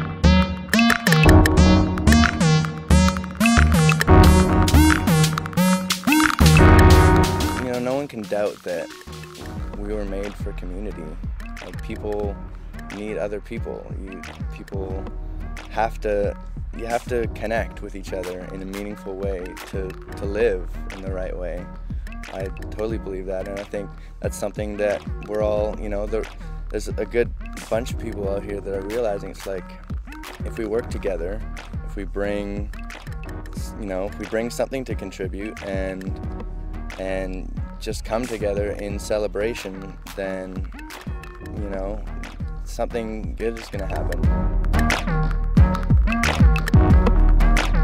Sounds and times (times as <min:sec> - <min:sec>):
Music: 0:00.0 - 0:47.8
Speech: 0:07.6 - 0:08.9, 0:09.6 - 0:15.1, 0:15.7 - 0:21.7, 0:22.3 - 0:29.8, 0:30.4 - 0:32.7, 0:33.6 - 0:36.2, 0:36.9 - 0:40.7, 0:41.4 - 0:42.1, 0:42.7 - 0:44.2.